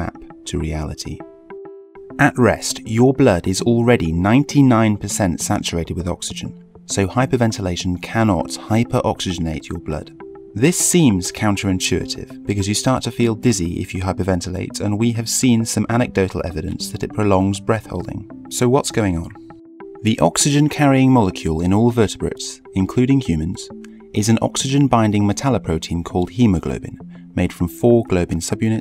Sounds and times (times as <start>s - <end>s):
Music: 0.0s - 28.8s
Narration, monologue: 0.0s - 28.8s.